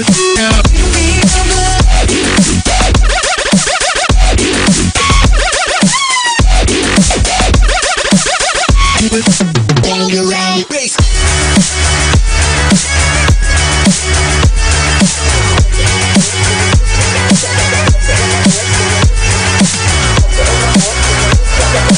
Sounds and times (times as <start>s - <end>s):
Dubstep: 0.0s - 21.9s.